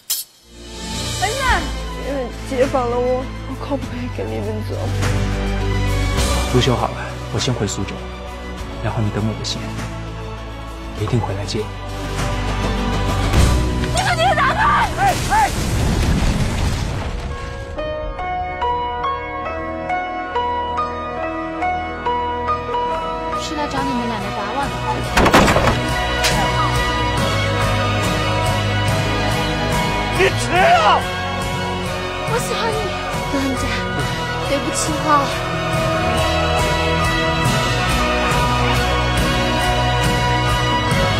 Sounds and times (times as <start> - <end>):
Music: 0.0 - 41.1.